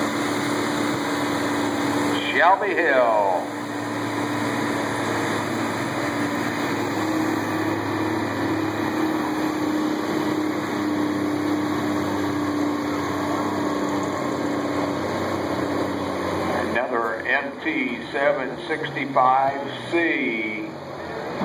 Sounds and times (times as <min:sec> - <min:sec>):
Speech: 0:02.2 - 0:03.5, 0:16.5 - 0:20.7.